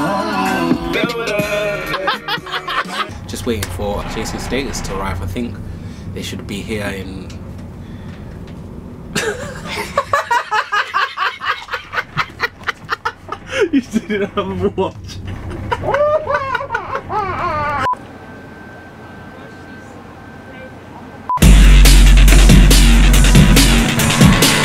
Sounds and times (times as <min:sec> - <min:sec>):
Speech: 0:03.3 - 0:05.6.